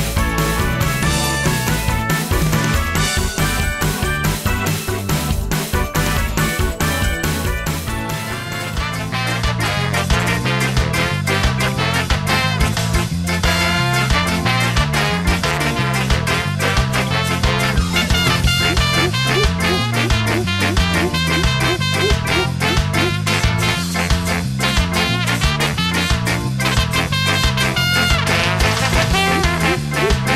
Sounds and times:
Music: 0.0 - 30.3.

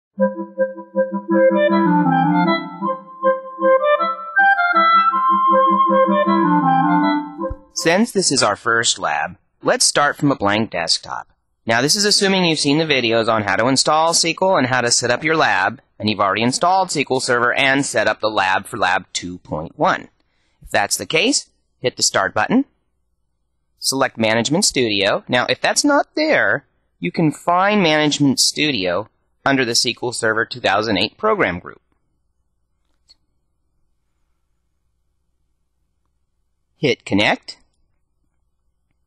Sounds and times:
Keyboard (musical): 0.1 - 8.1.

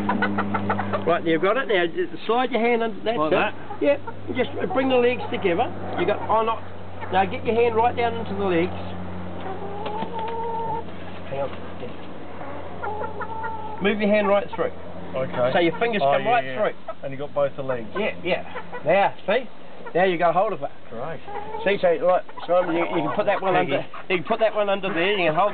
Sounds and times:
Chicken, rooster: 0.0 - 1.1, 9.4 - 11.6, 12.4 - 14.6, 21.2 - 25.5
Outside, rural or natural: 0.0 - 25.5.

